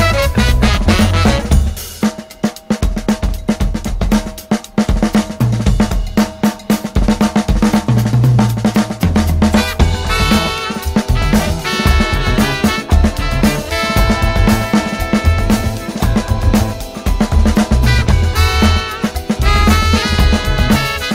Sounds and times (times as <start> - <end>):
Bass drum: 0.0 - 2.1, 4.9 - 21.1
Hi-hat: 0.0 - 21.1
Snare drum: 0.0 - 21.1.